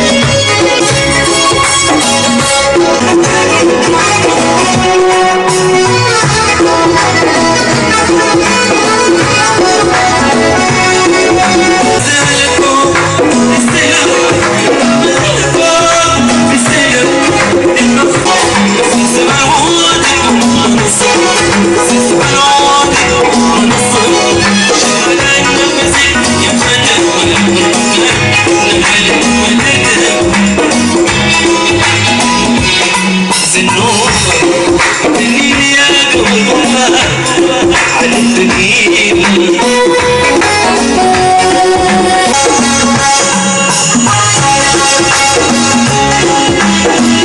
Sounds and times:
Music: 0:00.0 - 0:47.2.

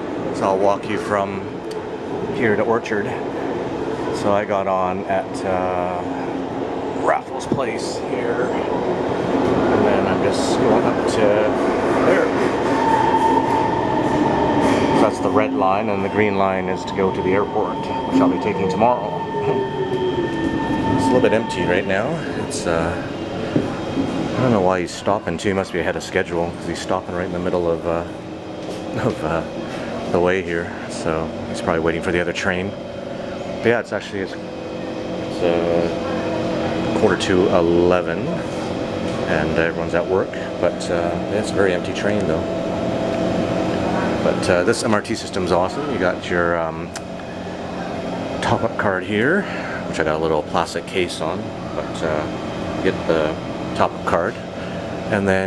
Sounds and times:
Speech: 0:00.4 - 0:01.5, 0:02.3 - 0:03.3, 0:04.2 - 0:06.2, 0:07.0 - 0:08.7, 0:09.7 - 0:12.4, 0:15.0 - 0:19.2, 0:21.0 - 0:23.2, 0:24.3 - 0:28.1, 0:29.0 - 0:29.5, 0:30.1 - 0:32.8, 0:33.6 - 0:34.4, 0:35.3 - 0:36.2, 0:36.9 - 0:38.5, 0:39.2 - 0:42.5, 0:43.9 - 0:47.0, 0:48.4 - 0:54.4, 0:55.1 - 0:55.4.

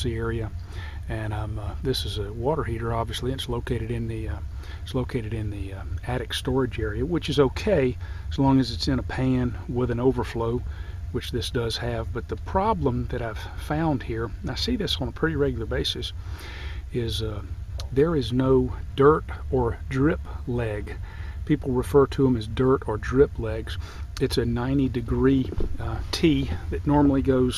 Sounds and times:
Speech: 0:00.0 - 0:16.2, 0:16.9 - 0:27.5.

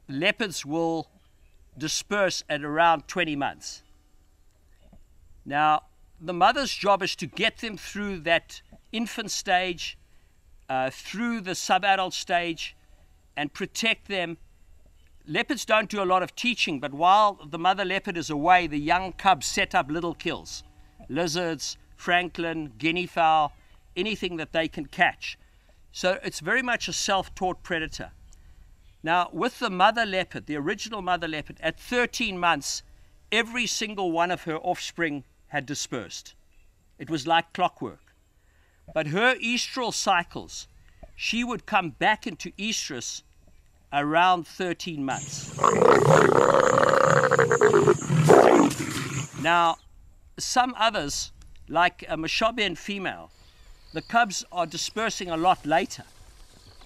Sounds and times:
Speech: 0:00.1 - 0:01.1, 0:01.8 - 0:03.8, 0:05.5 - 0:10.0, 0:10.7 - 0:12.8, 0:13.4 - 0:14.4, 0:15.3 - 0:25.4, 0:26.0 - 0:28.2, 0:29.0 - 0:32.8, 0:33.4 - 0:36.4, 0:37.0 - 0:38.0, 0:38.9 - 0:43.2, 0:44.0 - 0:45.6, 0:49.4 - 0:49.8, 0:50.4 - 0:53.3, 0:54.0 - 0:56.1
Roaring cats (lions, tigers): 0:45.2 - 0:49.4
Grunt: 0:45.2 - 0:49.5.

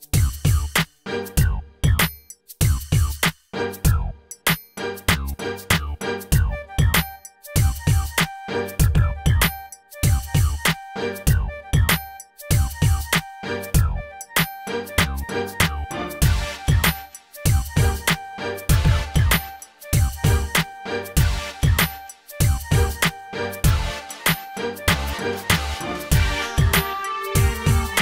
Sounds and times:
Music: 0:00.0 - 0:28.0.

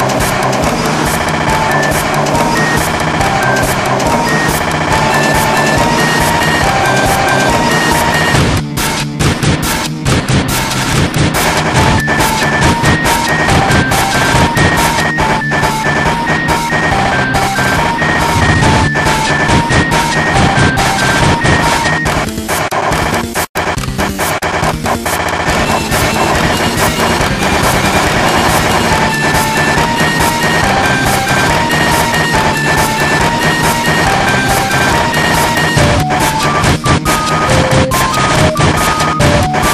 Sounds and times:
Music: 0:00.0 - 0:39.7.

